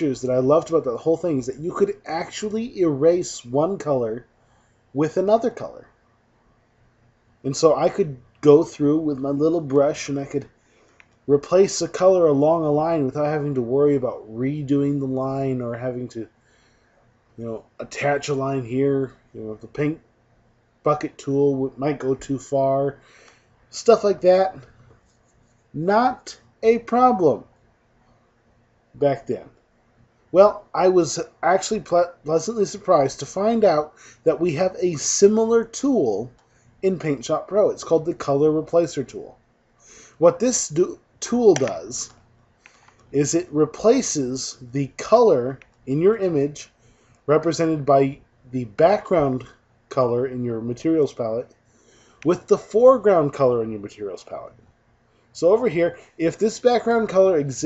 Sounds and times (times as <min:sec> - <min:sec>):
Speech: 0:00.0 - 0:04.3, 0:05.0 - 0:05.9, 0:07.5 - 0:10.5, 0:11.3 - 0:16.3, 0:17.4 - 0:20.0, 0:20.8 - 0:23.0, 0:23.7 - 0:24.7, 0:25.8 - 0:27.5, 0:29.0 - 0:29.6, 0:30.4 - 0:39.4, 0:40.2 - 0:42.2, 0:43.1 - 0:51.5, 0:52.2 - 0:54.6, 0:55.4 - 0:57.6.